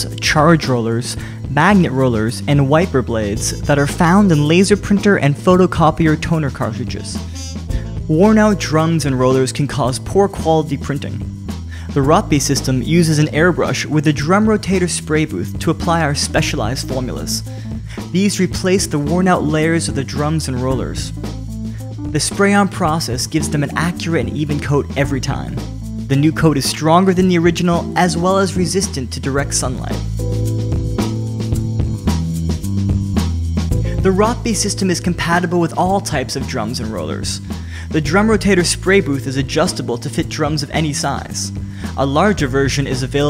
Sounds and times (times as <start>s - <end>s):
Speech: 0.0s - 21.2s, 22.1s - 30.1s, 33.9s - 43.2s
Music: 0.0s - 43.2s.